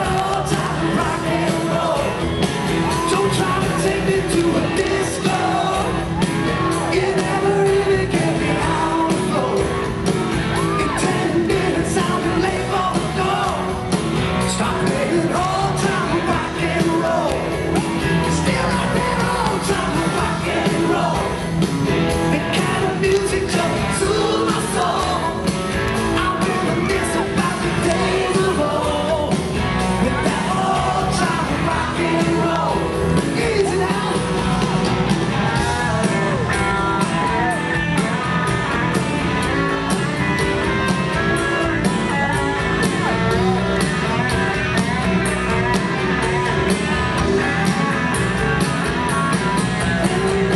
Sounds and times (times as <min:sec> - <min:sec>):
Rock and roll: 0:00.0 - 0:50.5.